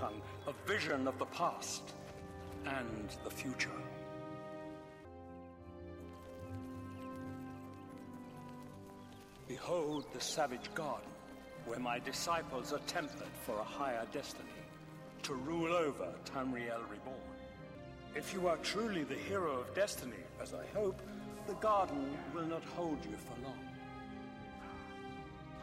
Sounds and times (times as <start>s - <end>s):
Male speech, man speaking: 0.0s - 2.0s, 2.6s - 4.0s, 9.5s - 17.3s, 18.2s - 23.7s
Narration, monologue: 0.0s - 24.0s
Music: 0.0s - 25.6s.